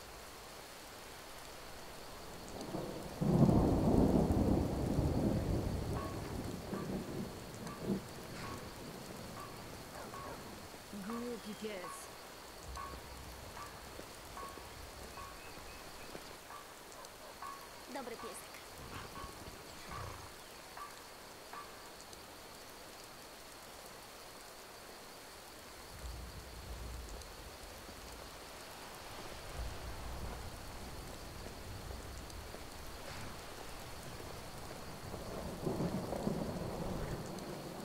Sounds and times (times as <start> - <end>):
Rain on surface: 0.0 - 37.8
Thunder: 2.6 - 10.6, 29.2 - 37.8.